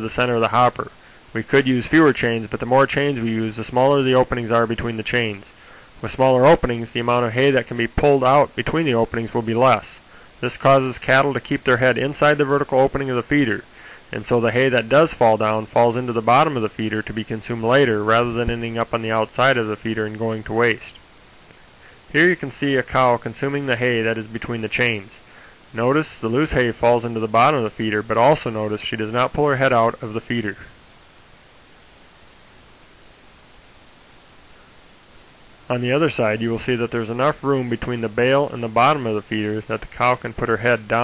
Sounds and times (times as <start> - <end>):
Speech: 0.0 - 21.0, 22.1 - 25.2, 25.8 - 30.8, 35.7 - 41.0.